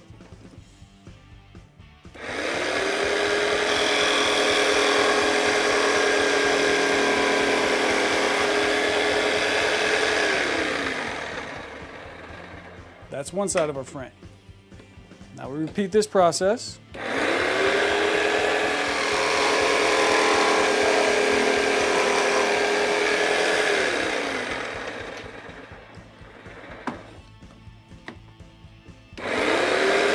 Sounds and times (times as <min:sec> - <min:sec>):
Sawing: 0:02.2 - 0:12.9, 0:17.0 - 0:27.2, 0:29.2 - 0:30.1.